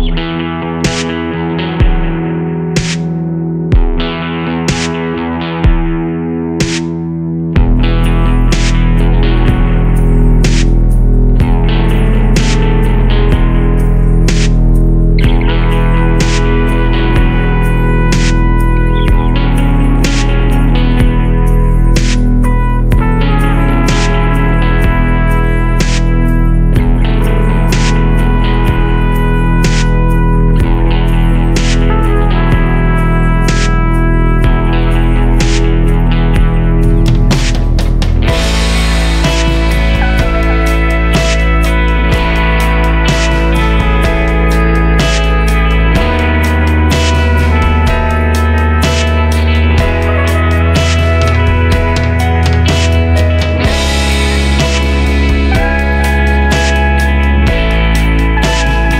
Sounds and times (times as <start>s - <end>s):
Electric guitar: 0.0s - 58.9s
Strum: 0.0s - 58.9s.